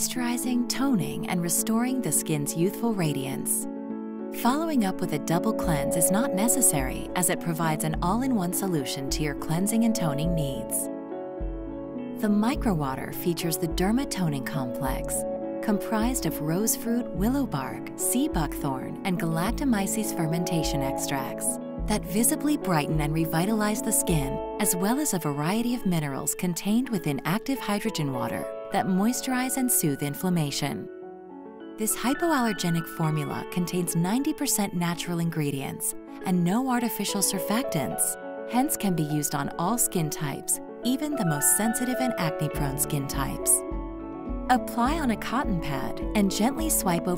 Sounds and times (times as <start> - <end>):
Speech: 0.0 - 3.7, 4.4 - 10.9, 12.2 - 30.9, 31.8 - 43.6, 44.5 - 47.1
Music: 0.0 - 47.1.